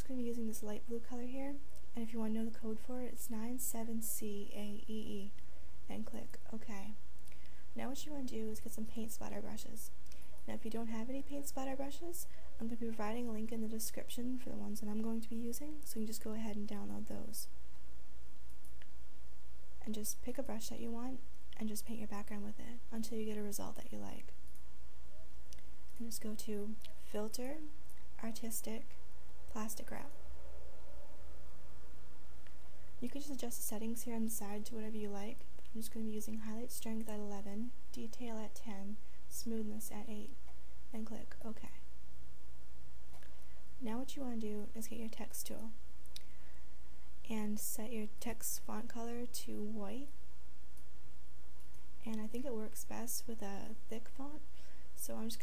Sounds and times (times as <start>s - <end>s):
Speech: 0.0s - 7.0s, 7.8s - 17.5s, 19.8s - 24.3s, 26.0s - 30.1s, 33.0s - 41.9s, 43.8s - 45.8s, 47.2s - 50.1s, 52.0s - 55.4s.